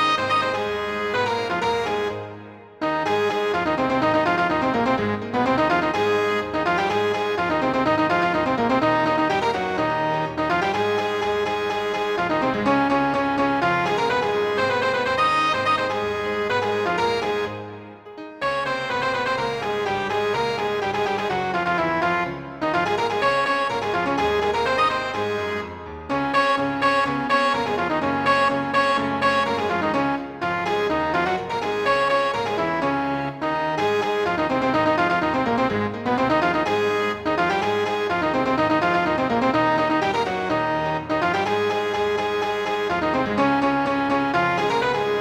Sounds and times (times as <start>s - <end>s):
Music: 0.0s - 45.2s.